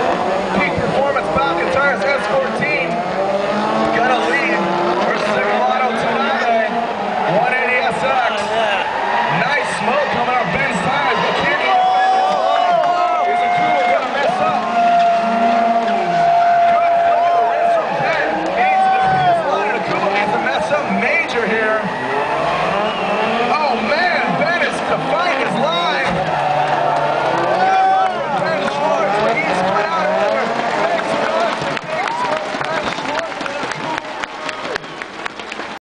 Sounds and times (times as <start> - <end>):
Speech: 0.5 - 3.0, 3.9 - 14.6, 16.8 - 21.9, 23.5 - 26.1, 28.2 - 34.1.